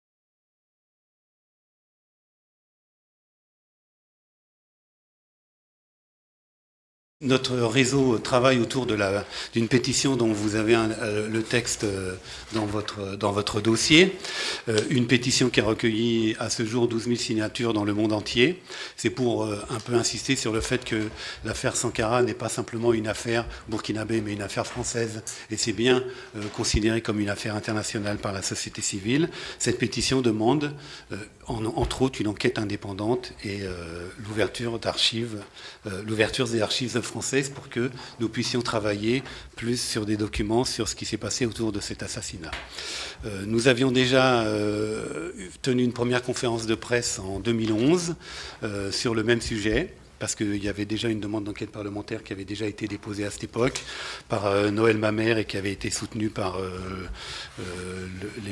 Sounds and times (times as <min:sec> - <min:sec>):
Speech: 0:07.2 - 0:58.5.